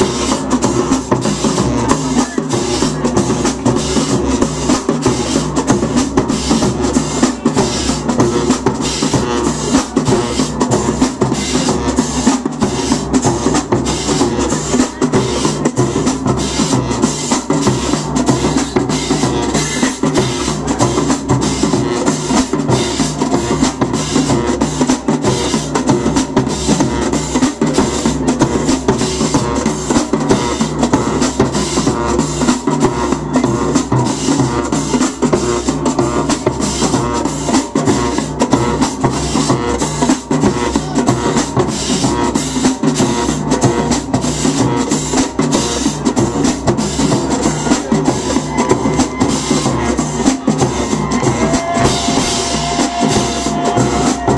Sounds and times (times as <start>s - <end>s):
Music: 0.0s - 54.3s.